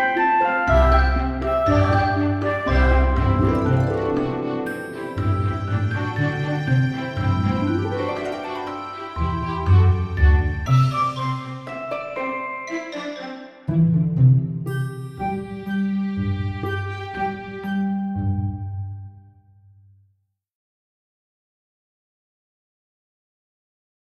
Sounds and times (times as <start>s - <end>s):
Music: 0.0s - 20.2s.